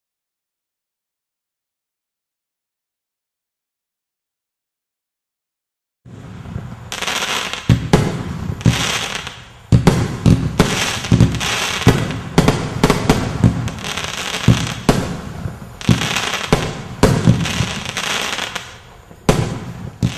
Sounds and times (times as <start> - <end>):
Fireworks: 6.1 - 20.1.